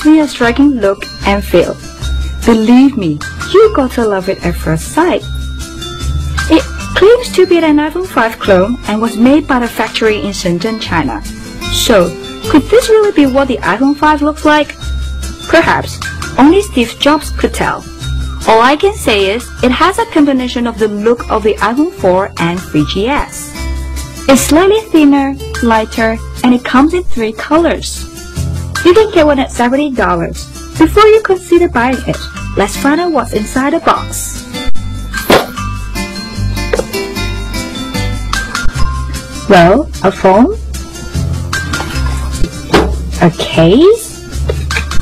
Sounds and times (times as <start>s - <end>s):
Speech: 0.0s - 1.8s, 2.4s - 5.3s, 6.5s - 14.7s, 15.5s - 17.8s, 18.5s - 23.4s, 24.3s - 28.0s, 28.8s - 34.4s, 39.5s - 40.6s, 43.2s - 44.2s
Music: 0.0s - 45.0s.